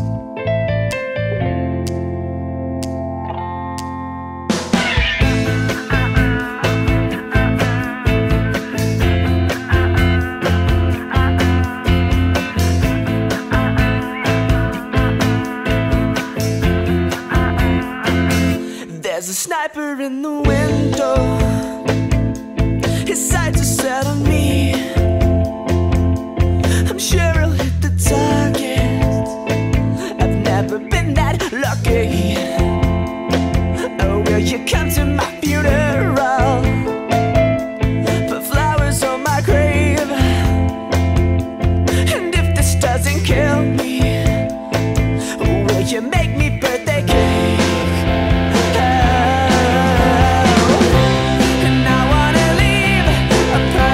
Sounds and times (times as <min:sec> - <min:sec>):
Music: 0:00.0 - 0:53.9.